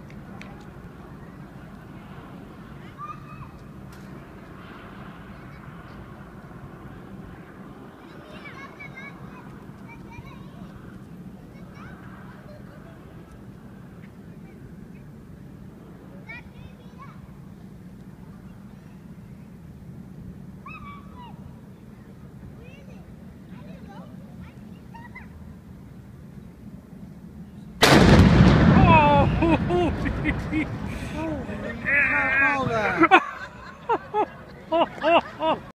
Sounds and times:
Eruption: 0.0s - 21.4s, 27.8s - 32.4s.

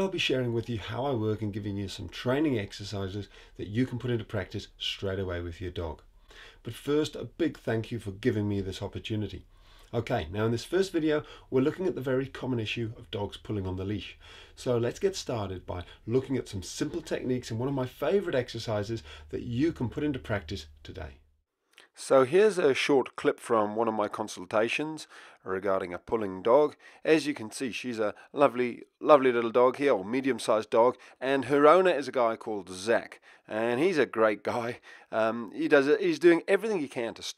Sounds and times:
Speech: 0.0s - 6.0s, 6.6s - 21.2s, 22.0s - 37.3s.

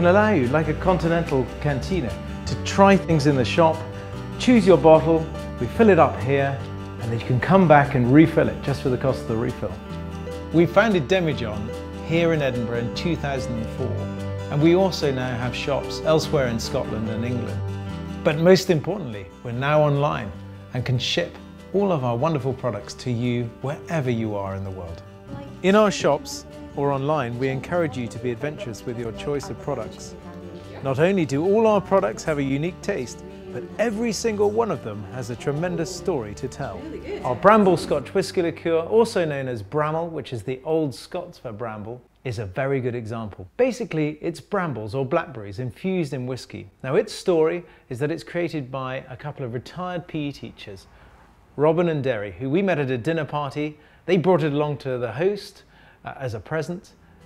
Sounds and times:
Speech: 0.0s - 3.8s, 4.4s - 9.8s, 10.6s - 17.6s, 18.2s - 50.9s, 51.6s - 57.0s
Music: 0.0s - 41.8s, 44.0s - 57.2s.

